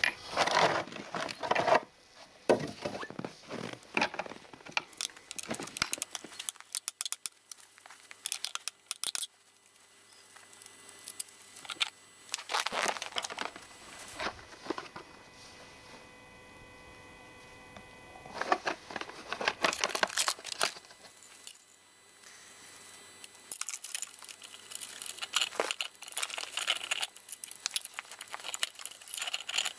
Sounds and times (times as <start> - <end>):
Tools: 2.8 - 7.4, 8.1 - 9.3, 23.2 - 29.7.